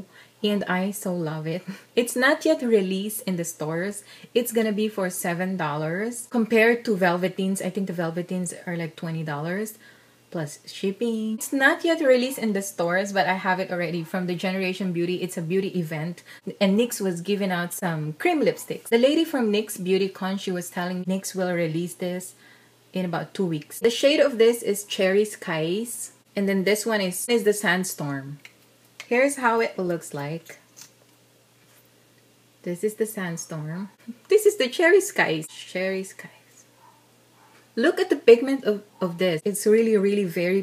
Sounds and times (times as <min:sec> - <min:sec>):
Speech: 0:00.0 - 0:22.4, 0:23.0 - 0:30.6, 0:32.6 - 0:36.5, 0:37.8 - 0:40.6.